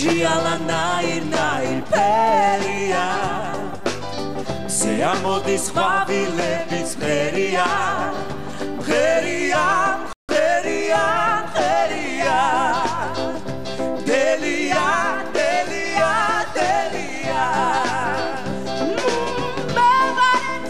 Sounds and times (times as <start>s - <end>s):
Music: 0.0s - 20.6s.